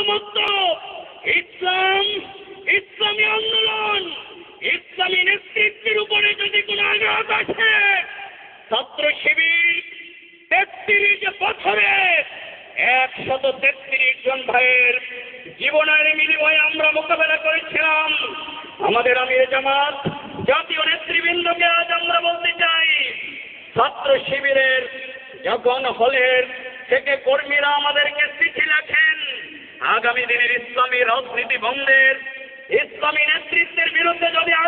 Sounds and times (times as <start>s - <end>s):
Male speech, man speaking: 0.0s - 34.6s.